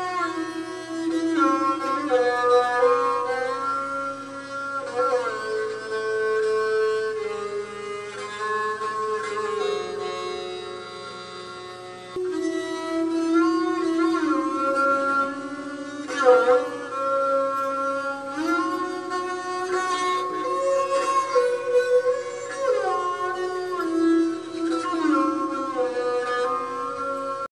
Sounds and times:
Folk music: 0.0s - 27.5s
Musical instrument: 0.0s - 27.5s.

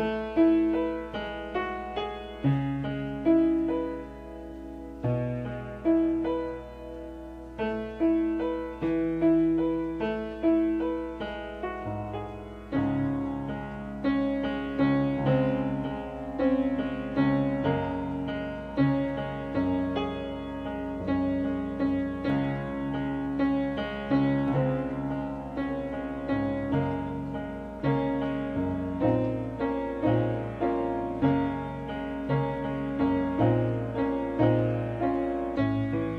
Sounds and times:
Music: 0.0s - 36.1s.

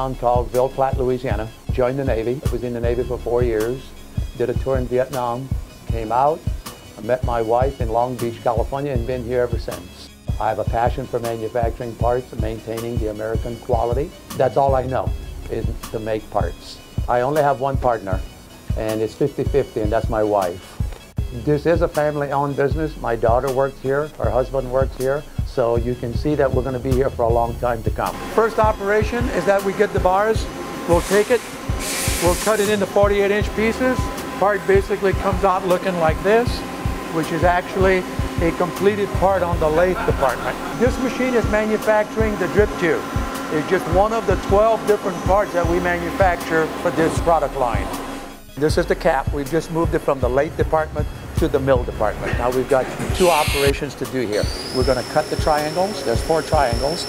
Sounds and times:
Speech: 0.0s - 18.2s, 18.8s - 20.6s, 21.3s - 31.4s, 32.2s - 47.9s, 48.6s - 57.0s
Music: 0.0s - 57.0s.

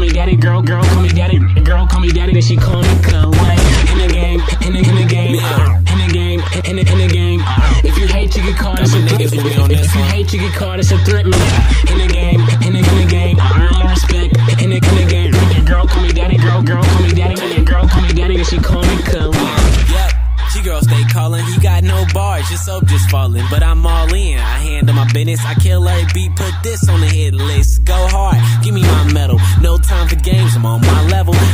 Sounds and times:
Dance music: 0.0s - 31.5s.

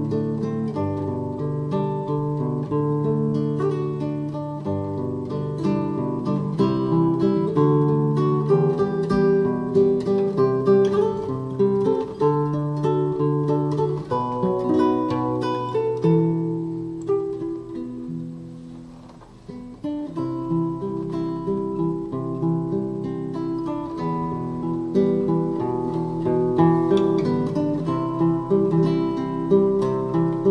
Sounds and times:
Strum: 0.0s - 30.5s.

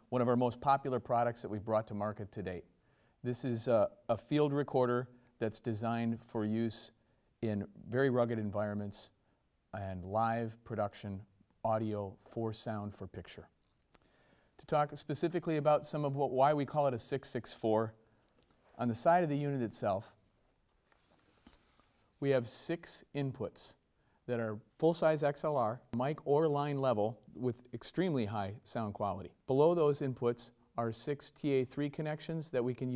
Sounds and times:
Speech: 0.0s - 13.6s, 14.6s - 18.0s, 18.8s - 20.2s, 22.2s - 32.9s.

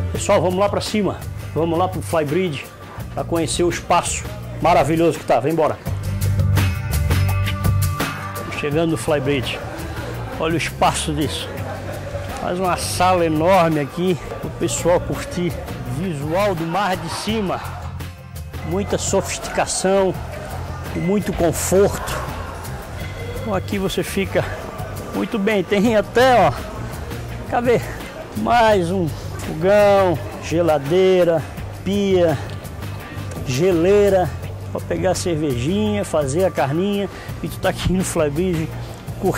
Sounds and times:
Music: 0.0s - 39.3s
Speech: 0.1s - 5.8s, 8.4s - 9.6s, 10.4s - 11.7s, 12.3s - 17.8s, 18.6s - 20.2s, 20.9s - 22.3s, 23.4s - 26.7s, 27.5s - 32.5s, 33.4s - 39.3s.

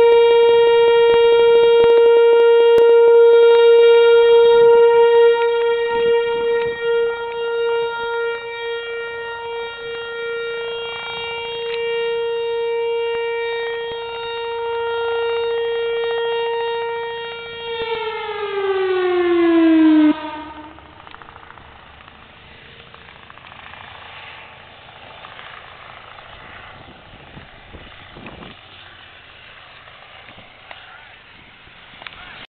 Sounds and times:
Vehicle: 0.0s - 32.5s.

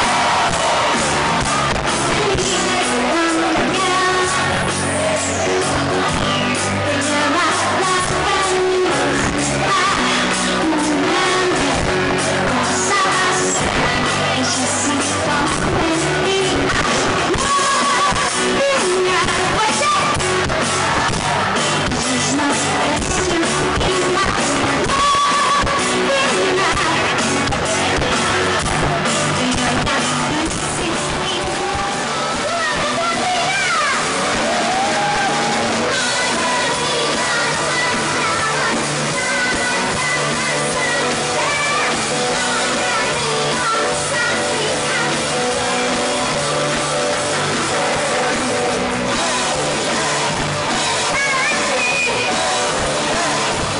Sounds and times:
Music: 0.0s - 53.7s.

